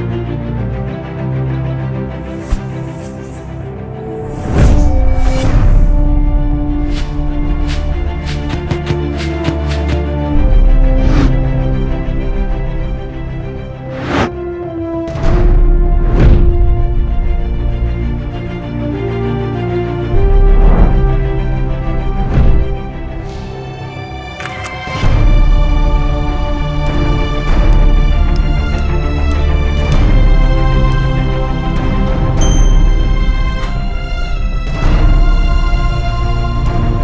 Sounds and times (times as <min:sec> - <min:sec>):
Music: 0:00.0 - 0:37.0.